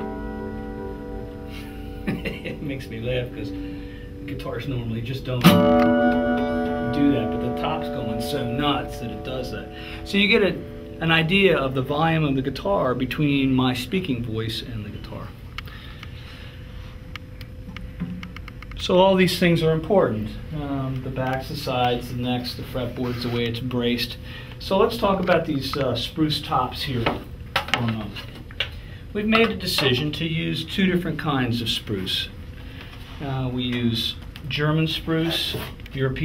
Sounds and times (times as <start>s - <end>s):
Strum: 0.0s - 12.4s
Speech: 2.2s - 3.6s, 4.3s - 5.6s, 6.9s - 15.4s, 18.8s - 28.3s, 29.1s - 32.4s, 33.2s - 36.2s.